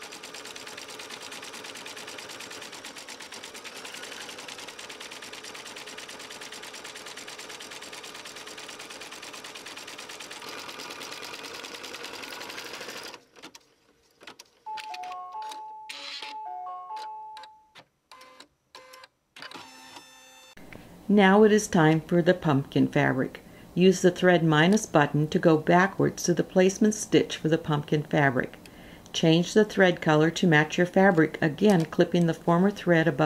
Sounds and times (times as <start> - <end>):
Sewing machine: 0.0 - 14.6, 18.1 - 20.2.